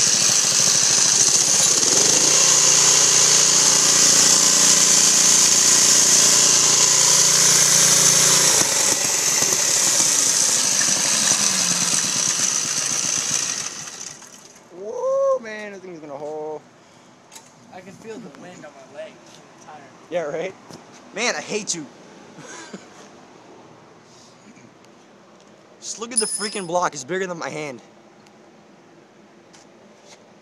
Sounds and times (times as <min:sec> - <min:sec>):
Medium engine (mid frequency): 0:00.0 - 0:14.8
Speech: 0:14.8 - 0:16.6, 0:17.7 - 0:20.6, 0:21.2 - 0:21.9, 0:25.8 - 0:27.9.